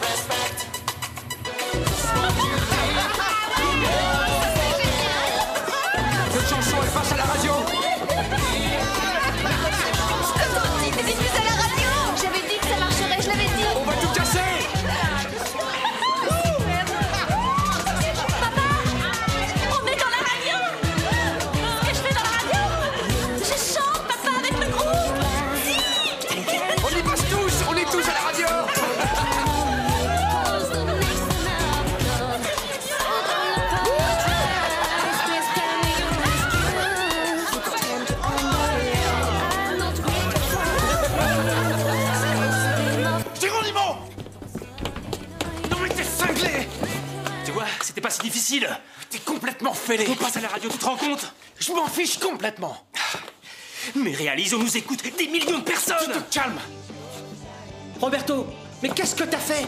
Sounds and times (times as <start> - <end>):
Music: 0.0 - 48.5, 54.2 - 59.6.